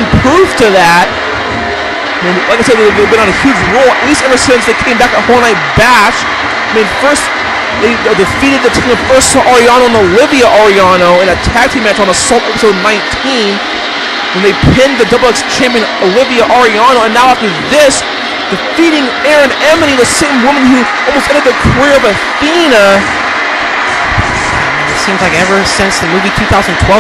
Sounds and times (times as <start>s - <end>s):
Speech: 0.0s - 1.1s, 2.2s - 13.7s, 14.3s - 23.1s, 24.6s - 27.0s.